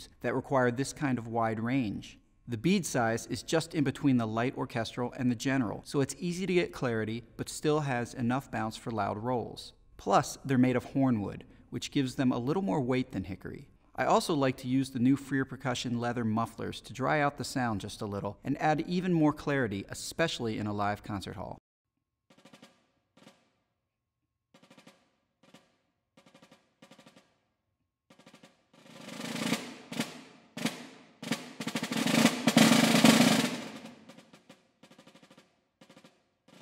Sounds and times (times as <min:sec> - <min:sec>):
Speech: 0:00.0 - 0:21.6.